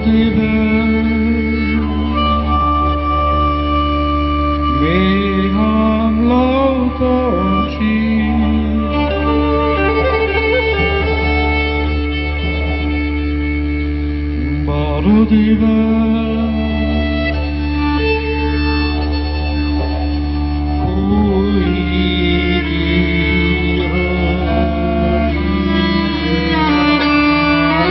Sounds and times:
String section: 0.0 - 27.9.

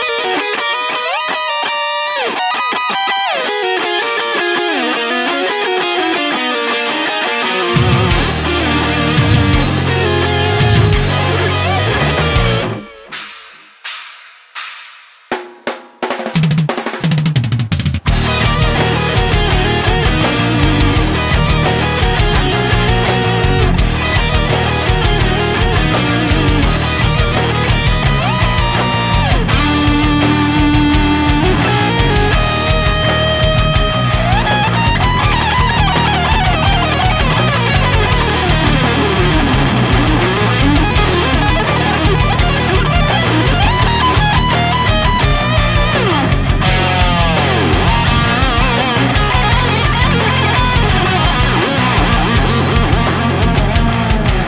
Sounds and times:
Angry music: 3.4 - 15.1, 16.6 - 54.4
Background music: 7.6 - 13.6, 18.0 - 54.4.

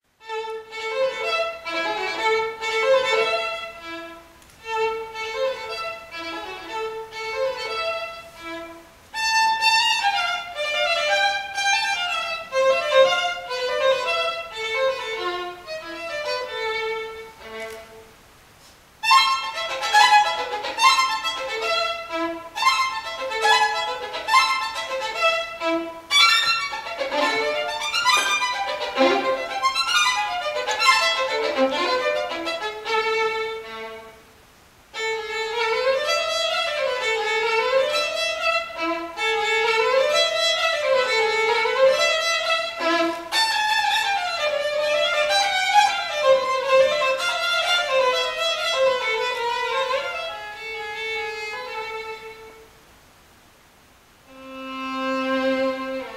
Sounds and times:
Violin, fiddle: 0.1 - 18.2, 19.0 - 34.3, 34.9 - 52.8, 54.3 - 56.1.

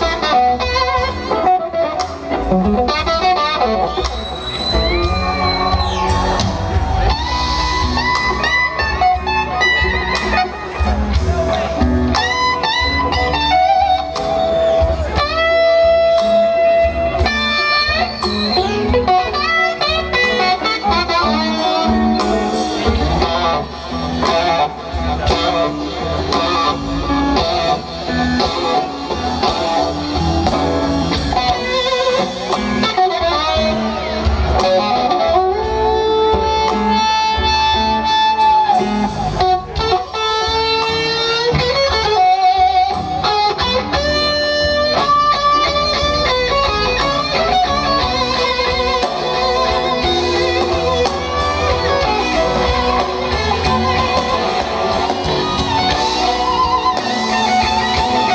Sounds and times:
Electric guitar: 0.0 - 58.3.

